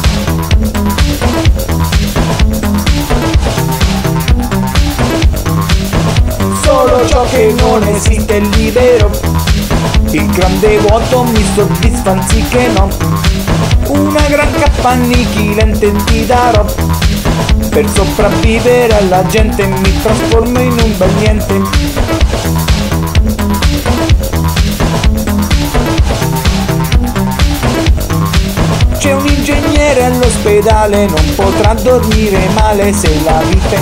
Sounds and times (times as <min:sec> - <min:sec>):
Disco: 0:00.0 - 0:33.8.